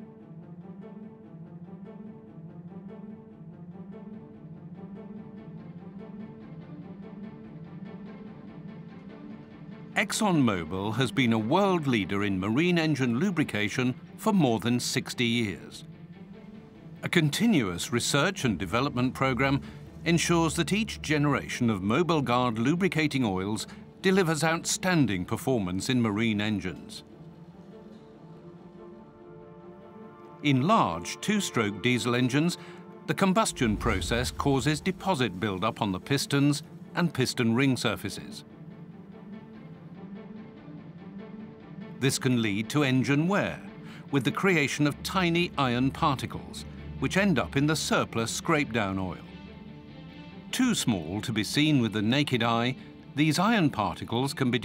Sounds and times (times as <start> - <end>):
Speech: 10.0 - 15.8, 17.0 - 27.0, 30.4 - 38.4, 42.0 - 49.3, 50.5 - 54.6.